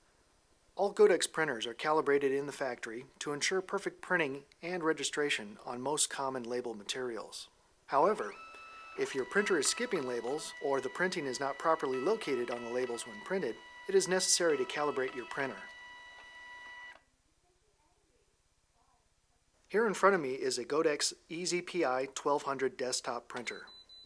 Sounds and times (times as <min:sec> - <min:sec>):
Speech: 0:00.8 - 0:08.4, 0:09.0 - 0:15.7, 0:19.7 - 0:23.7
Printer: 0:08.3 - 0:17.0.